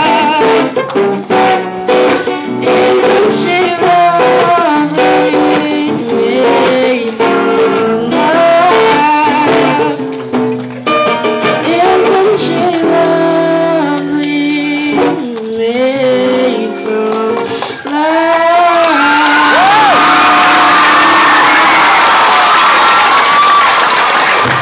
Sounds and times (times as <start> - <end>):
Singing: 0.0 - 10.1, 11.5 - 21.8
Music: 0.0 - 22.0
Inside, large room or hall: 0.0 - 24.6.